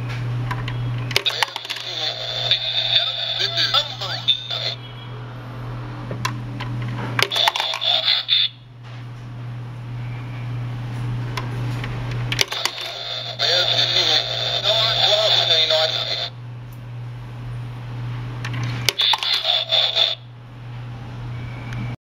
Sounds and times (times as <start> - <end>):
Speech: 1.2 - 4.8, 7.3 - 8.6, 12.5 - 16.3, 19.0 - 20.2.